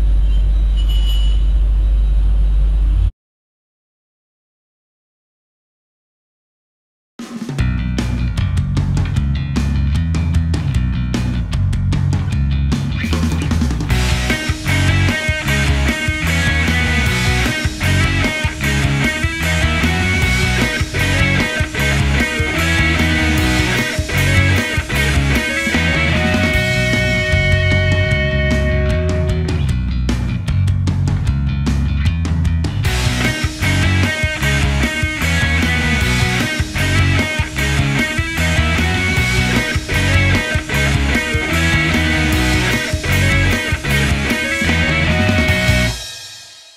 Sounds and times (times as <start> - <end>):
Music: 7.2 - 46.7.